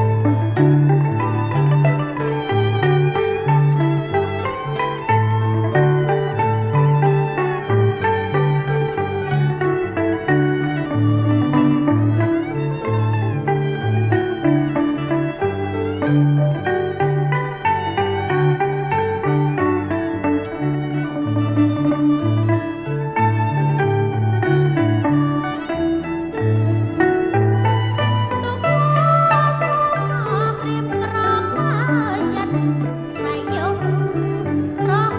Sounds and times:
Pizzicato: 0.0s - 35.1s
Zither: 0.0s - 35.1s.

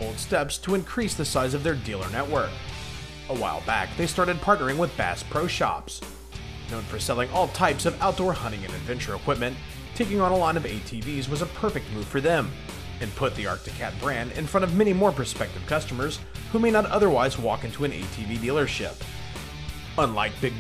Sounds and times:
Speech: 0.0s - 2.6s, 3.3s - 6.1s, 6.7s - 19.0s, 20.0s - 20.6s
Music: 0.0s - 20.6s.

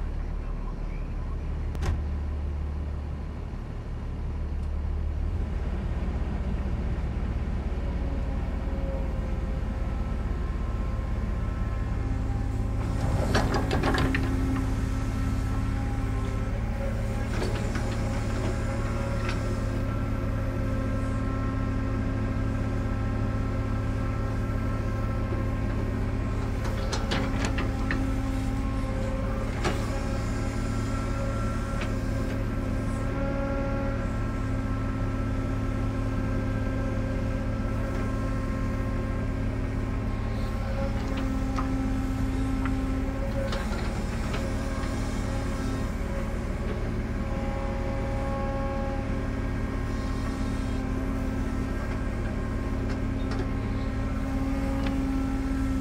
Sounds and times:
Vehicle: 0.0s - 55.8s.

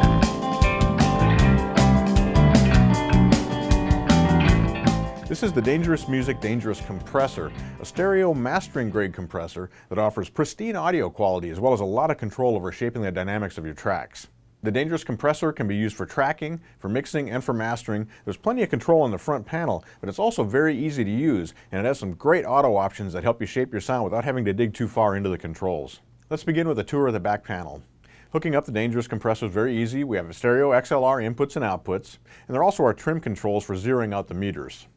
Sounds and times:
Speech: 5.3s - 34.9s.

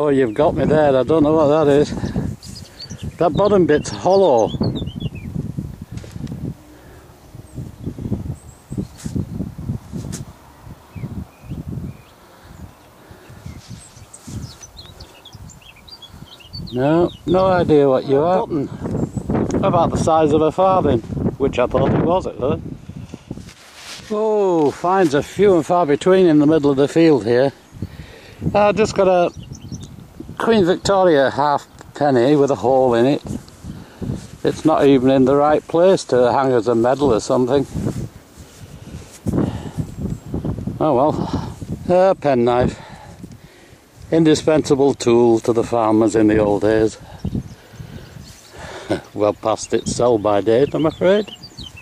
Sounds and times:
Speech: 0.0s - 2.0s, 3.2s - 4.5s, 16.7s - 18.8s, 19.6s - 22.6s, 24.1s - 27.6s, 28.5s - 29.3s, 30.4s - 33.3s, 34.4s - 37.7s, 40.8s - 42.8s, 44.1s - 47.0s, 48.9s - 51.4s.

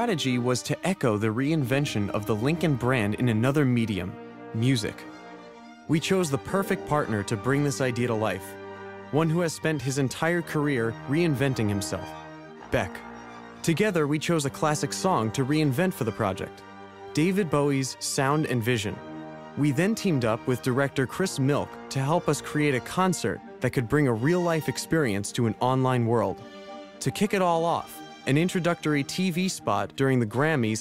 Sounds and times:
Speech: 0.0s - 5.1s, 5.9s - 12.1s, 12.7s - 16.6s, 17.2s - 19.0s, 19.6s - 26.4s, 27.0s - 30.8s
Music: 0.0s - 30.8s.

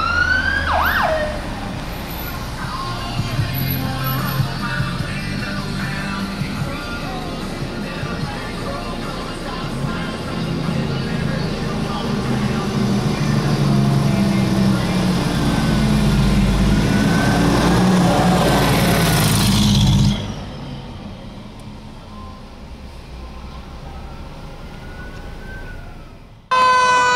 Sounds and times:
Motor vehicle (road): 0.0s - 27.1s.

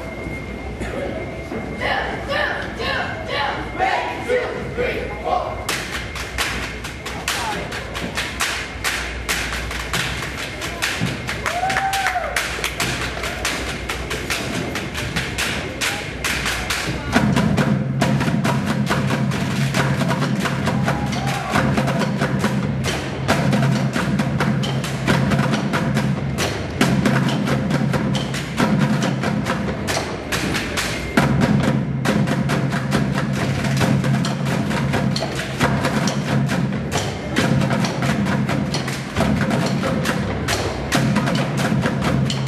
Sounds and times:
Drum: 5.7s - 42.4s.

